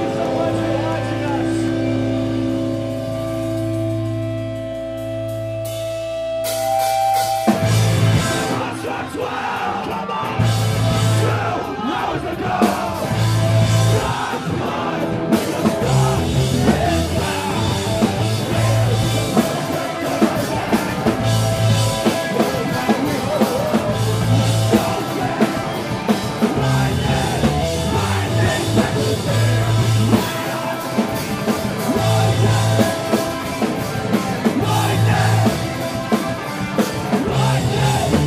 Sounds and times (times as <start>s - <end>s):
Music: 0.0s - 38.2s.